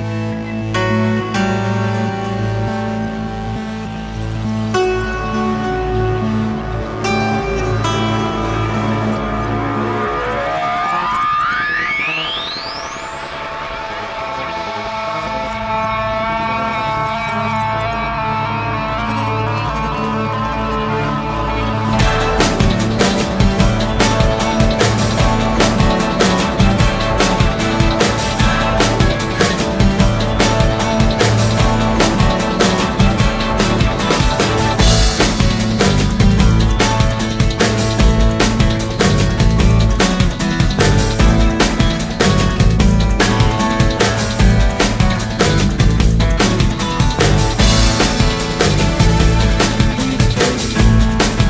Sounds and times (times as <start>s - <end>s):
Music: 0.0s - 51.5s.